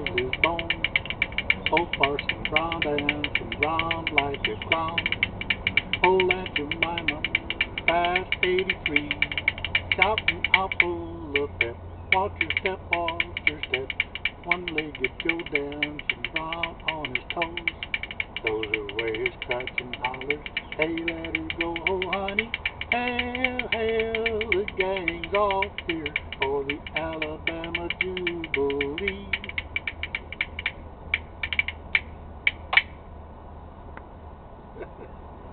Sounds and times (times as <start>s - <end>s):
Rattle: 0.0s - 33.0s.